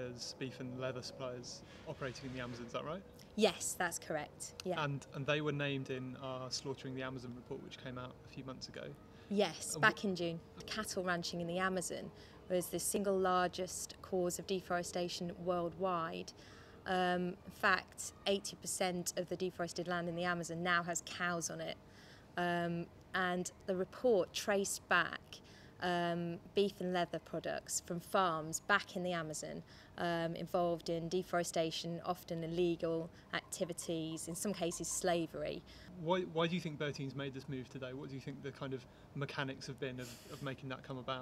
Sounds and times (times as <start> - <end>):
Speech: 0.0 - 16.3, 22.4 - 41.2.